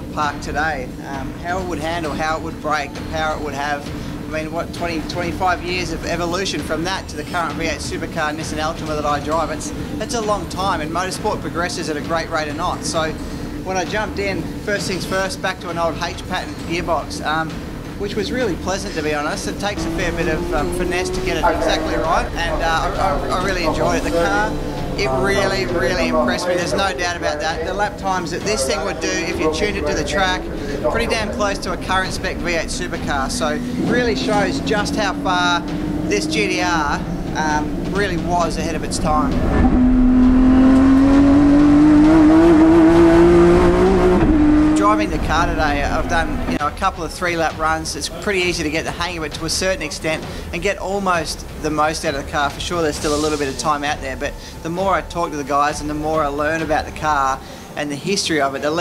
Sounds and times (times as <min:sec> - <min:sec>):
Speech: 0:00.0 - 0:39.4, 0:44.8 - 0:58.8
Car: 0:00.0 - 0:46.6.